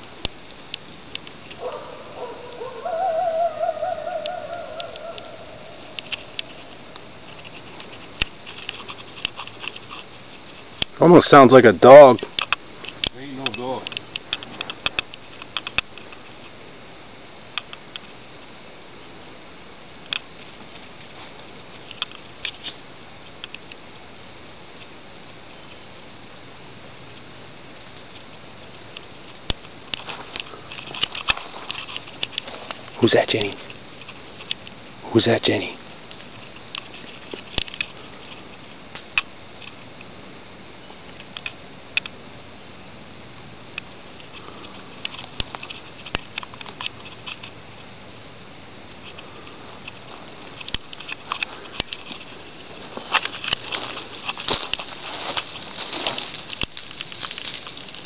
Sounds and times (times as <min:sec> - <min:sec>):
Speech: 0:11.0 - 0:12.2, 0:13.2 - 0:13.9, 0:33.0 - 0:33.6, 0:35.0 - 0:35.8.